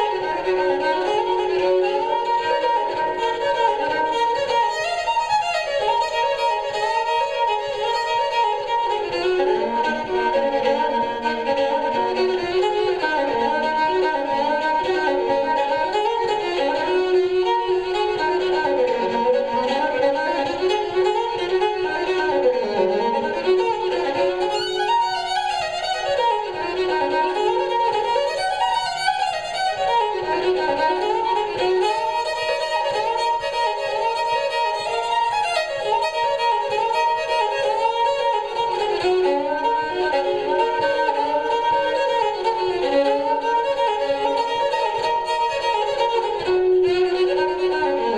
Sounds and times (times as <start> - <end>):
Violin, fiddle: 0.0 - 48.1.